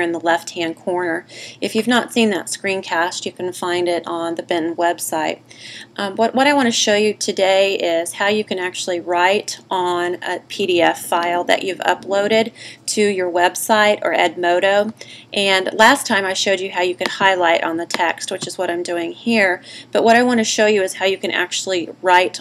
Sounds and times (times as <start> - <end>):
Speech: 0.0 - 5.4, 6.0 - 22.4.